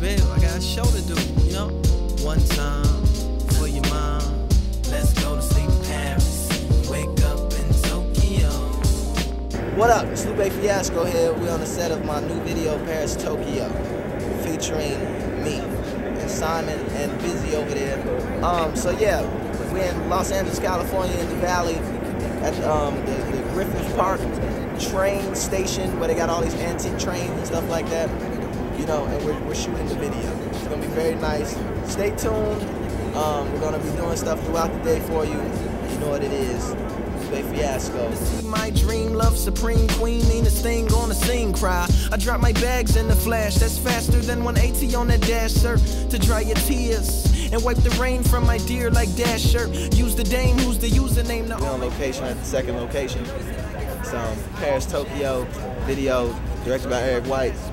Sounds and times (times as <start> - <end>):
Music: 0.0 - 55.0
Speech: 9.7 - 40.3, 50.0 - 57.7.